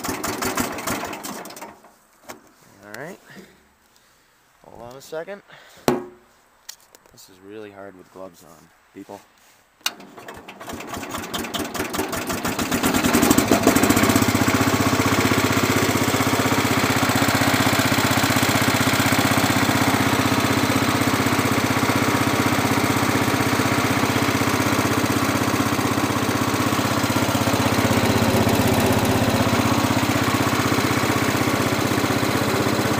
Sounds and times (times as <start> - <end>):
Vehicle: 10.8 - 32.9.